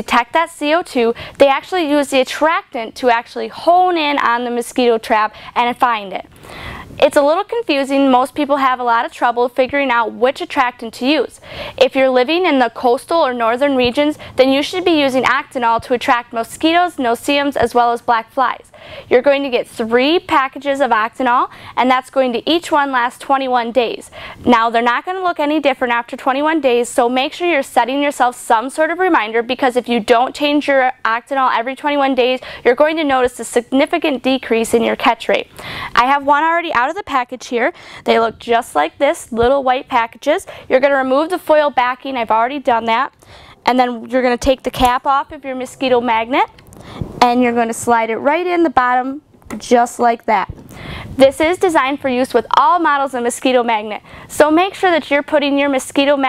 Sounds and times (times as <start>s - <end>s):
Speech: 7.0s - 43.1s, 43.7s - 46.5s, 47.2s - 50.6s, 51.2s - 56.2s.